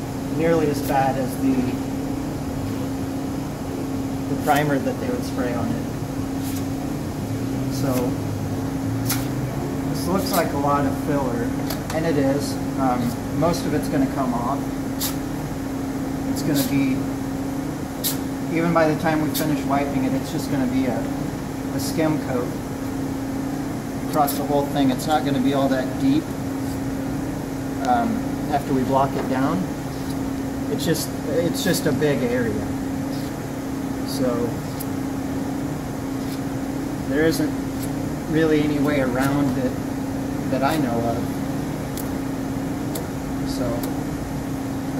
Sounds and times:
Speech: 0.4 - 1.8, 4.3 - 5.9, 7.7 - 8.2, 9.9 - 14.6, 16.4 - 17.1, 18.5 - 22.6, 24.1 - 26.3, 27.8 - 29.7, 30.7 - 32.7, 34.1 - 34.6, 37.1 - 37.6, 38.3 - 39.8, 40.5 - 41.3, 43.5 - 43.9.

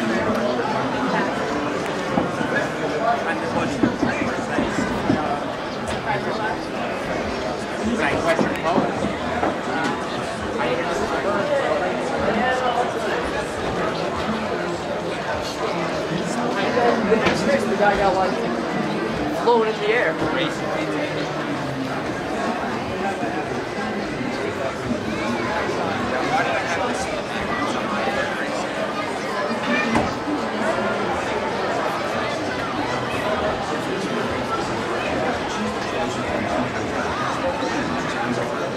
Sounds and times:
Speech: 0.0 - 38.7.

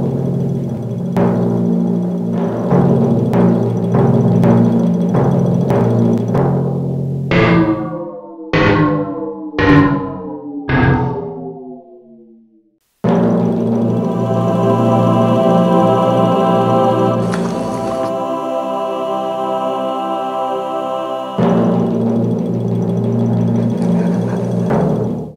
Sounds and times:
Music: 0.0 - 11.4, 13.0 - 25.3.

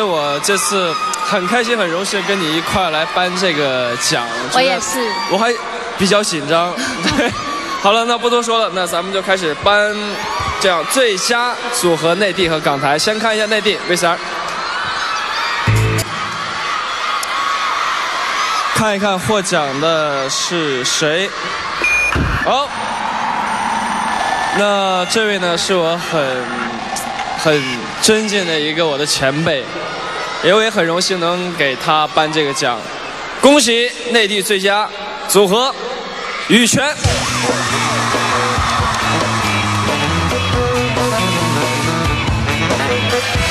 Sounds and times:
Speech: 0.0 - 6.8.

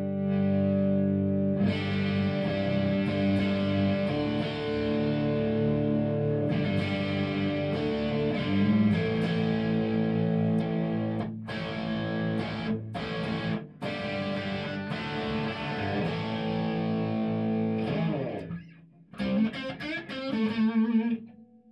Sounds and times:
Music: 0.0 - 21.7.

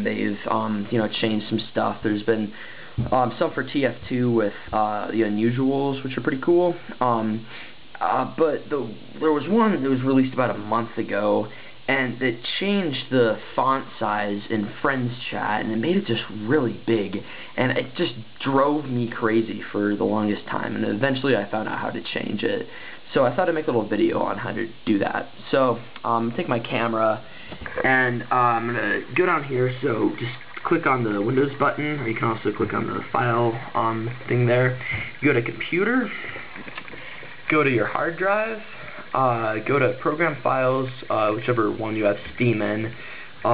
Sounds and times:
Speech: 0.0 - 36.4, 37.5 - 43.5.

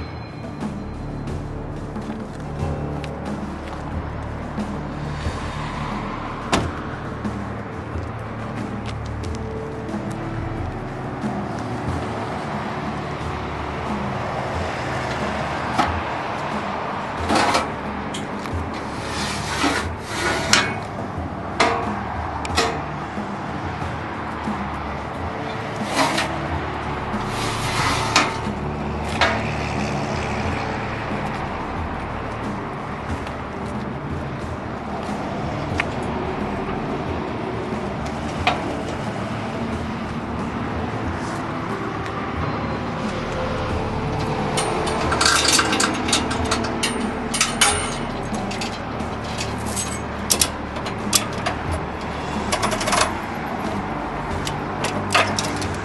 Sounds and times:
Music: 0.0 - 55.8.

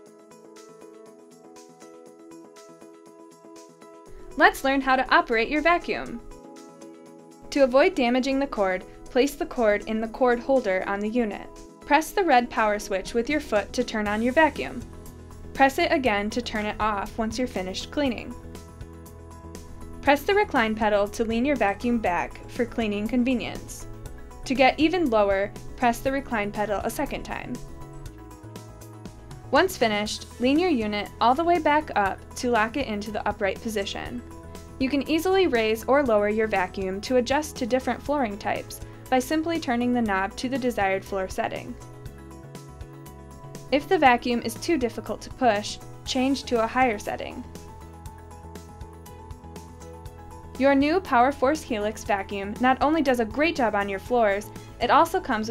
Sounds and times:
Music: 0.0 - 55.5
Speech: 4.4 - 6.2, 7.5 - 14.8, 15.6 - 18.4, 20.0 - 23.8, 24.5 - 27.6, 29.5 - 34.2, 34.8 - 41.8, 43.8 - 47.4, 50.6 - 55.5.

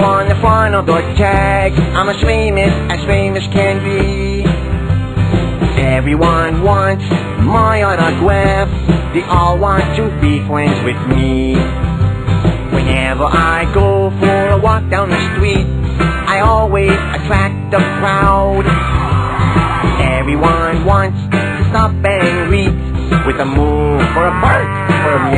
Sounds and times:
Music: 0.0 - 25.3.

